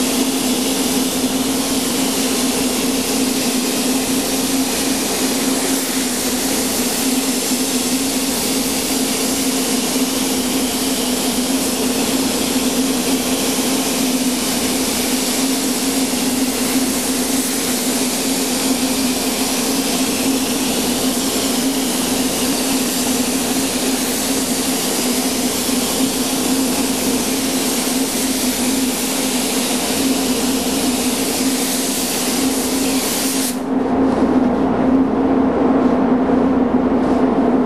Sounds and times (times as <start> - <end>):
Inside, small room: 0.0 - 37.6.